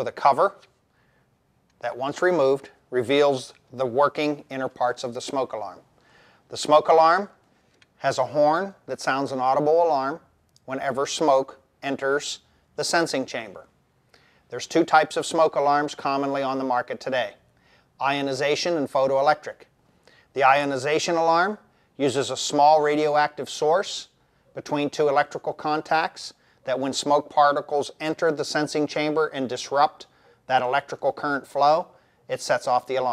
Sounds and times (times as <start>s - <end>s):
Speech: 0.0s - 0.7s, 1.8s - 5.8s, 6.5s - 7.4s, 8.0s - 13.7s, 14.5s - 17.4s, 18.0s - 19.7s, 20.3s - 33.1s.